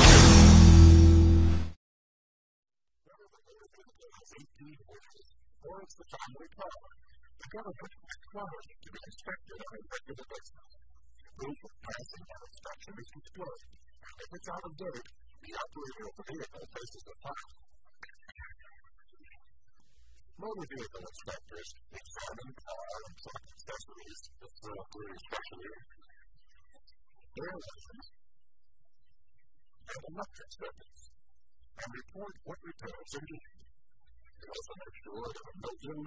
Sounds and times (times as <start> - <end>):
Speech: 3.1 - 10.7, 11.3 - 19.4, 20.3 - 26.1, 27.3 - 28.1, 29.9 - 31.0, 31.8 - 33.6, 34.4 - 36.0.